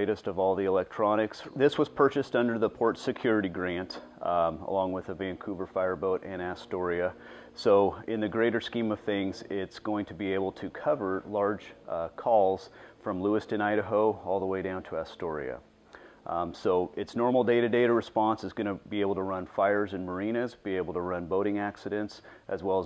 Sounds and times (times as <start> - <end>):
Speech: 0.0 - 15.6, 16.3 - 22.8.